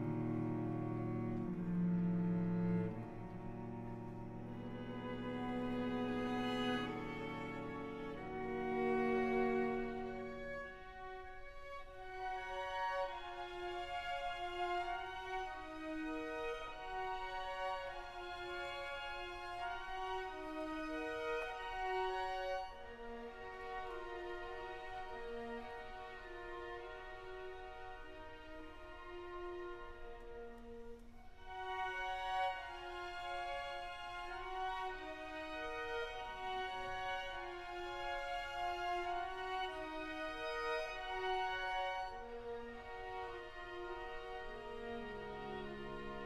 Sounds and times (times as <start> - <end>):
Violin, fiddle: 0.0 - 46.2.